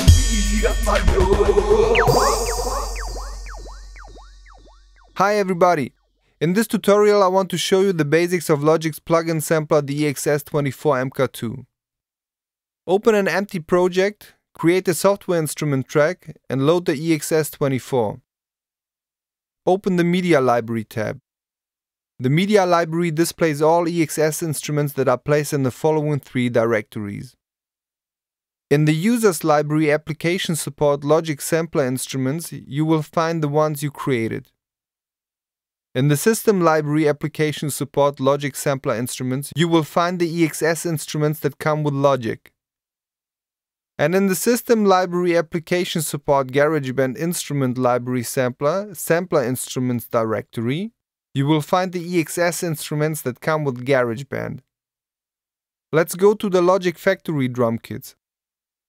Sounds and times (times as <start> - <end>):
Speech: 0.0 - 3.1, 5.2 - 11.7, 12.9 - 18.2, 19.7 - 21.2, 22.2 - 27.4, 28.7 - 34.5, 36.0 - 42.5, 44.0 - 54.7, 56.0 - 58.2.